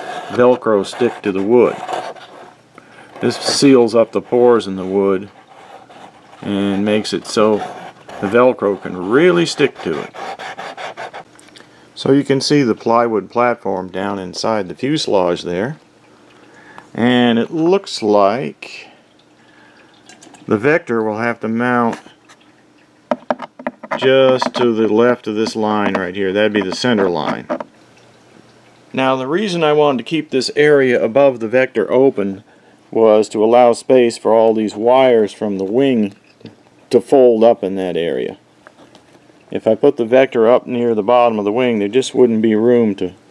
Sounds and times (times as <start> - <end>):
Inside, small room: 0.0 - 43.3
Speech: 0.2 - 2.0, 3.2 - 5.3, 6.4 - 10.2, 12.0 - 15.8, 16.9 - 19.0, 20.5 - 22.1, 24.0 - 27.5, 28.9 - 36.2, 36.9 - 38.4, 39.5 - 43.2.